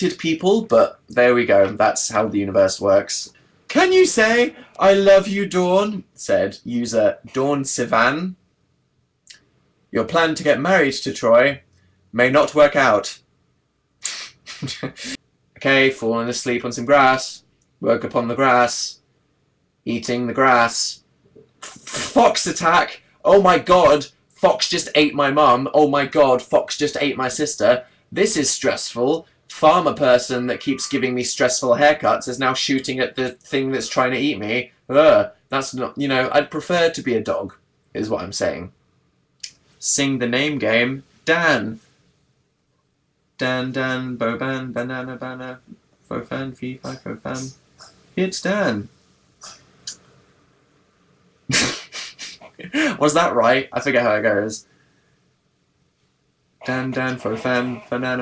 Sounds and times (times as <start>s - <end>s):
Speech: 0.0s - 8.4s, 9.9s - 13.2s, 14.1s - 19.0s, 19.8s - 38.8s, 39.5s - 41.8s, 43.4s - 50.0s, 51.5s - 54.7s, 56.6s - 58.2s.